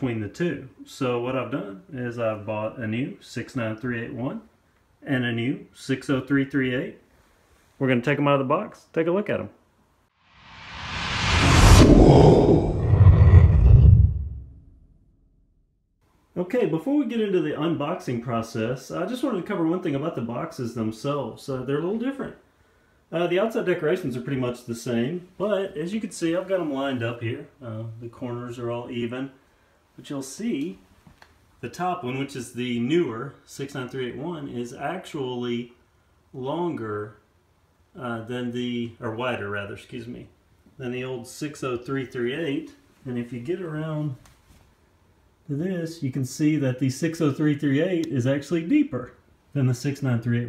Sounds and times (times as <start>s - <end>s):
Speech: 0.0s - 7.1s, 7.8s - 9.6s, 16.4s - 22.4s, 23.1s - 29.4s, 30.0s - 30.9s, 31.6s - 37.3s, 37.9s - 44.2s, 45.4s - 50.4s.